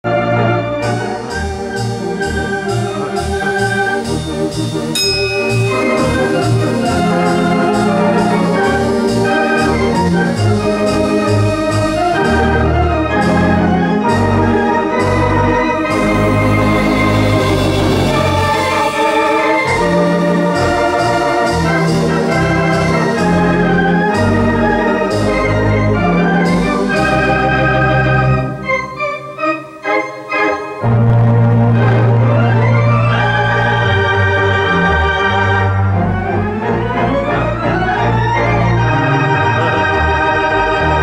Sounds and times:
Church bell: 5.0s - 6.0s.

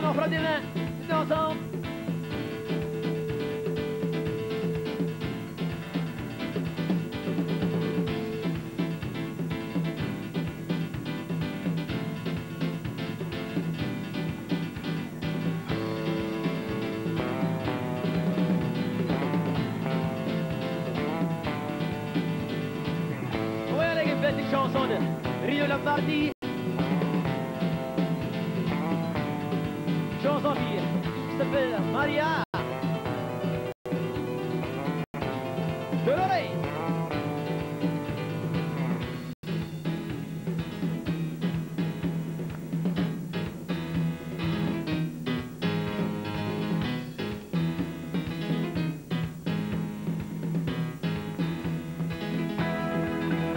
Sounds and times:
Music: 0.0s - 53.5s.

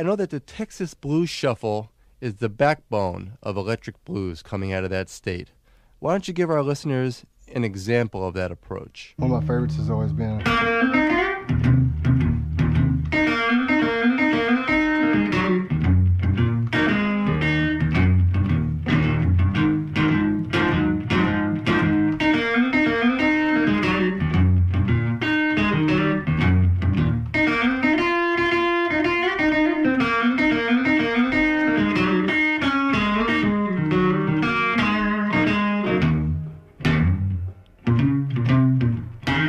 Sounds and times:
Strum: 9.2s - 39.4s.

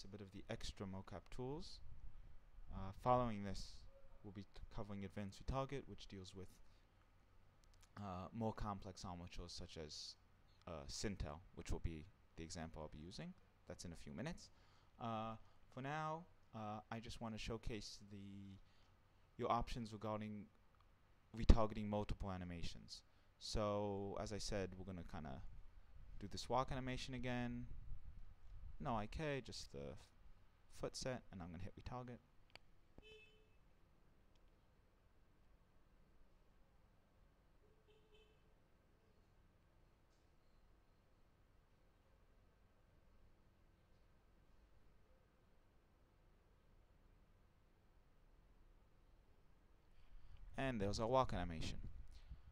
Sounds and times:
Speech: 0.0s - 1.8s, 2.7s - 6.6s, 7.9s - 18.6s, 19.4s - 20.6s, 21.3s - 25.5s, 26.2s - 27.7s, 28.8s - 32.2s, 50.6s - 51.9s.

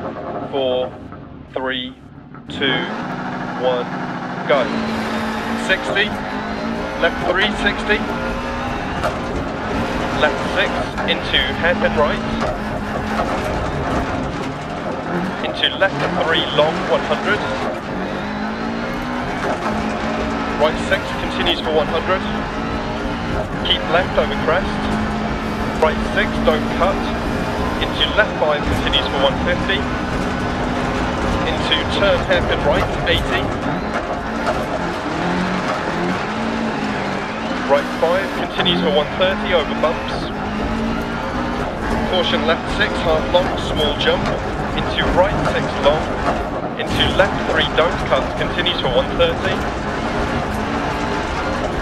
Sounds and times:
Speech: 0.5s - 3.0s, 3.6s - 4.8s, 5.6s - 6.2s, 7.0s - 8.1s, 10.2s - 12.4s, 15.3s - 17.7s, 20.6s - 22.4s, 23.6s - 24.9s, 25.8s - 27.1s, 27.8s - 29.8s, 31.4s - 33.6s, 37.6s - 40.3s, 42.0s - 46.1s, 46.8s - 49.7s.

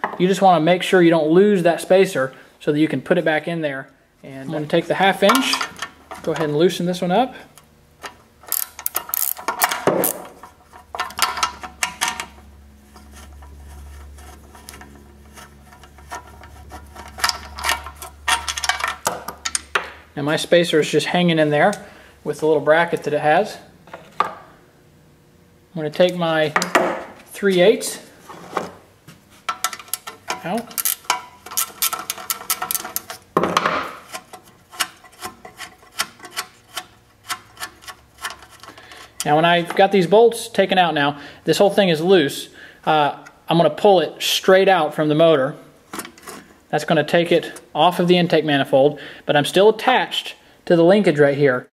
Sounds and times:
Speech: 0.2s - 5.6s, 6.2s - 7.5s, 20.2s - 23.7s, 25.7s - 26.6s, 27.3s - 28.1s, 30.3s - 30.8s, 39.2s - 45.6s, 46.7s - 51.7s.

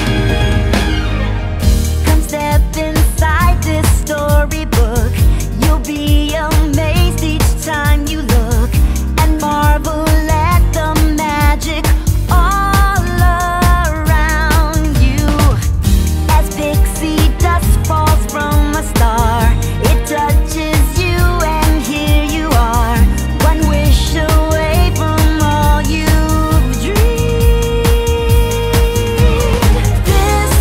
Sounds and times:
Music: 0.0s - 30.6s.

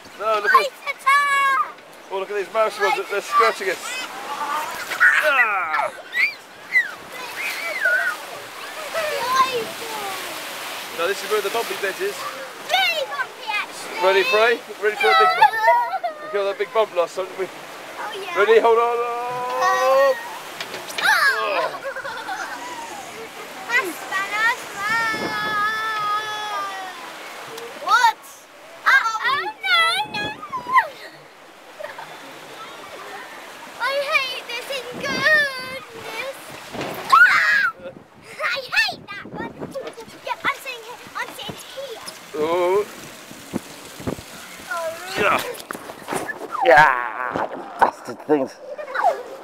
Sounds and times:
Stream: 0.0s - 49.4s.

